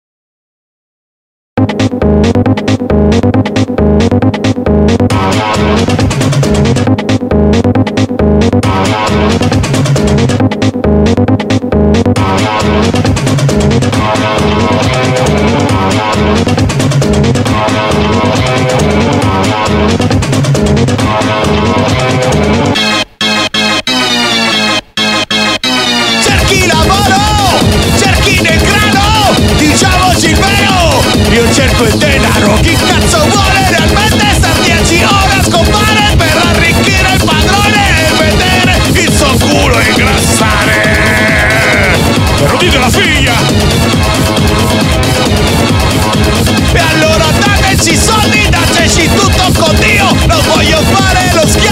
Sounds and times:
Pop music: 1.6 - 51.7
Sampler: 1.6 - 51.7.

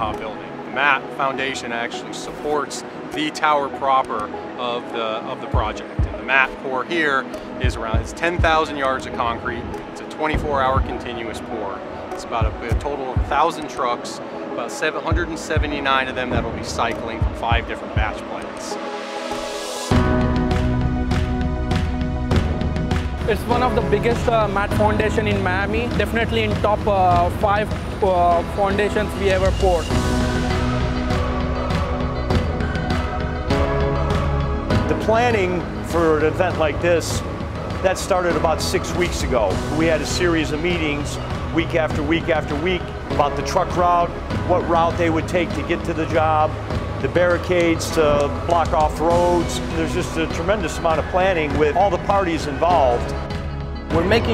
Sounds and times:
Speech: 0.0 - 18.8, 23.3 - 30.0, 34.9 - 37.2, 37.8 - 53.2, 53.9 - 54.3
Music: 0.0 - 54.3.

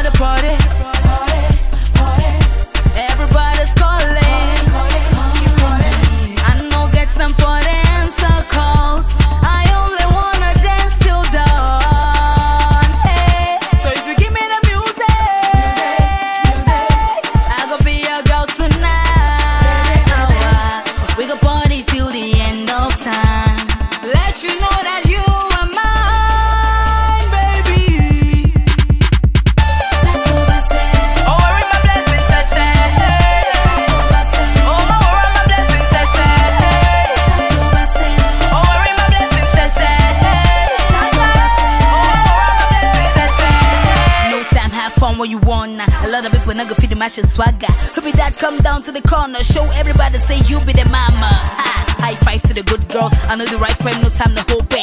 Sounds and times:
Disco: 0.0 - 54.8
Exciting music: 0.0 - 54.8
Happy music: 0.0 - 54.8
Pop music: 0.0 - 54.8.

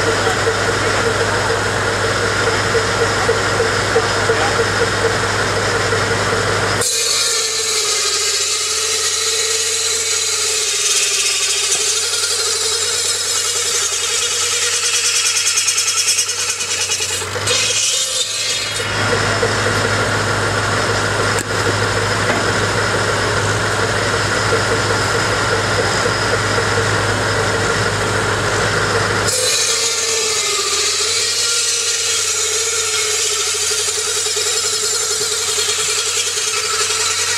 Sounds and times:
Engine: 0.0 - 37.3
Vehicle: 0.0 - 37.3.

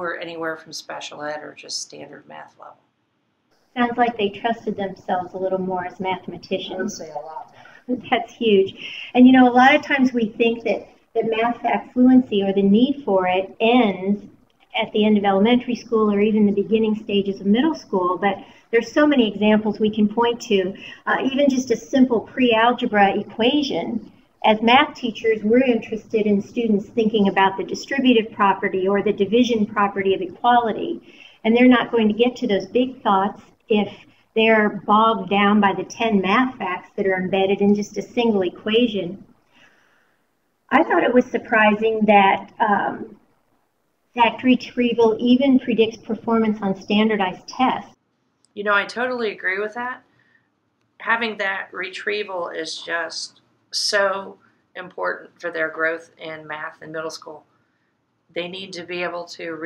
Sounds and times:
Speech: 0.0 - 2.8, 3.8 - 39.2, 40.7 - 43.2, 44.2 - 47.9, 48.6 - 50.0, 51.0 - 57.4, 58.4 - 59.6.

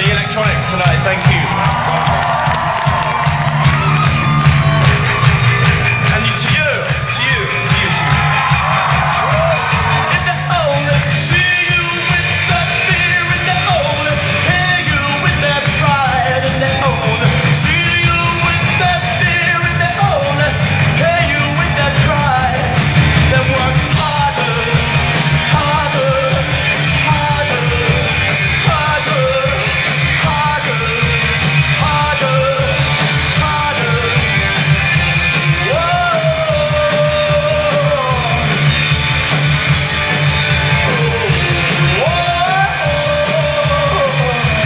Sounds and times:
Inside, large room or hall: 0.0 - 44.6
Pop music: 0.0 - 44.6
Singing: 9.4 - 34.4, 35.5 - 38.7, 40.8 - 44.6.

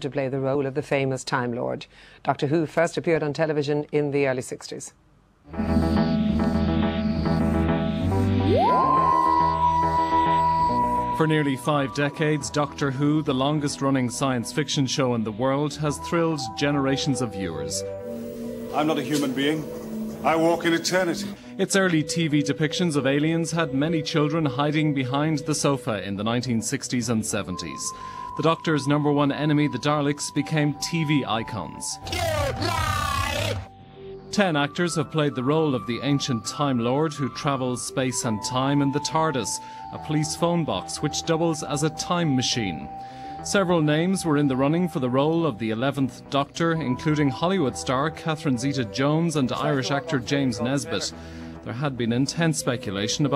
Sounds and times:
Music: 5.5 - 53.3.

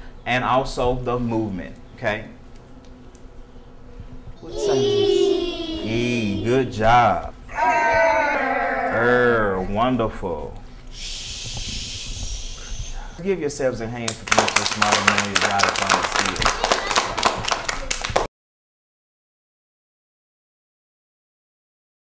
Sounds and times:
Speech: 4.4 - 7.3, 13.2 - 16.5
Applause: 14.1 - 18.3.

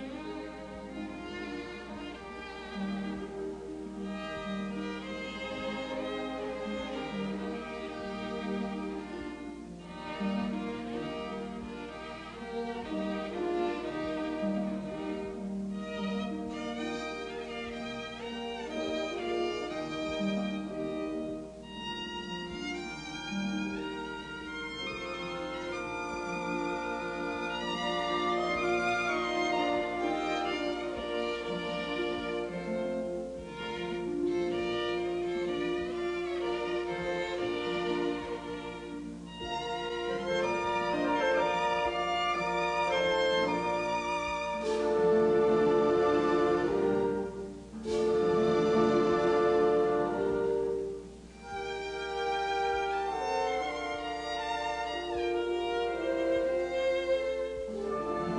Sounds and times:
Violin, fiddle: 0.0 - 58.3.

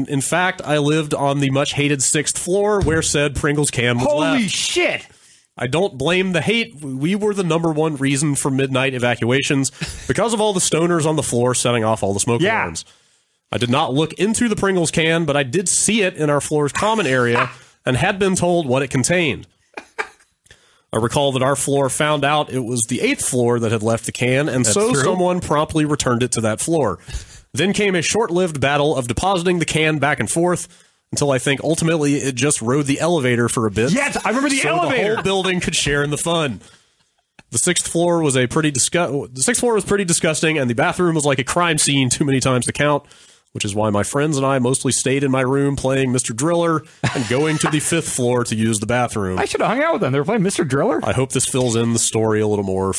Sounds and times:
Speech: 0.0 - 12.9, 13.5 - 19.5, 20.9 - 36.6, 37.5 - 52.9.

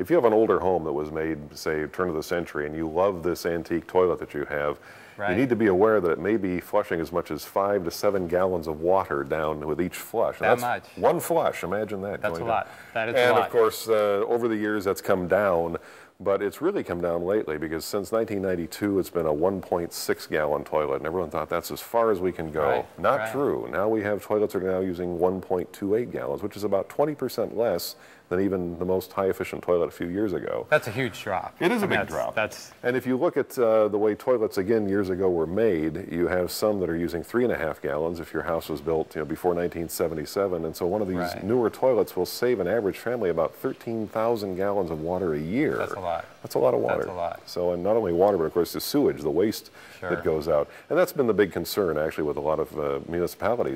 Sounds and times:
Speech: 0.0 - 53.7.

